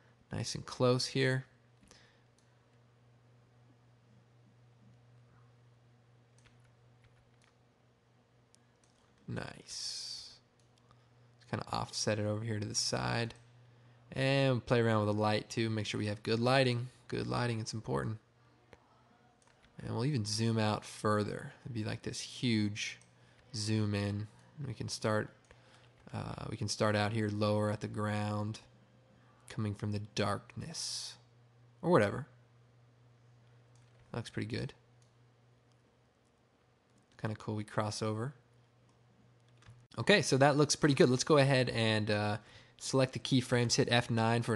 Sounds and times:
Inside, small room: 0.0s - 44.5s
Speech: 0.3s - 1.6s, 9.3s - 10.5s, 11.4s - 13.4s, 14.1s - 25.4s, 26.1s - 28.7s, 29.5s - 32.4s, 34.1s - 34.8s, 37.2s - 38.5s, 40.0s - 44.5s.

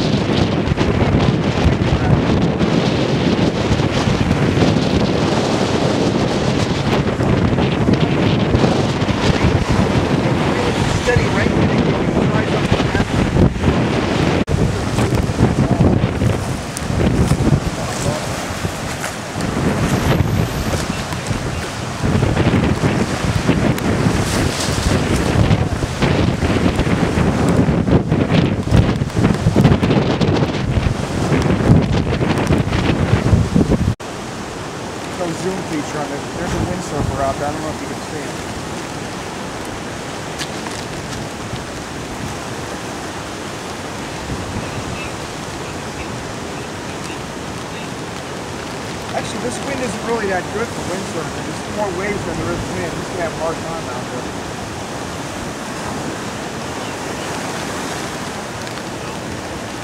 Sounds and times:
Waves, surf: 0.0s - 59.8s
Wind noise (microphone): 0.0s - 59.8s.

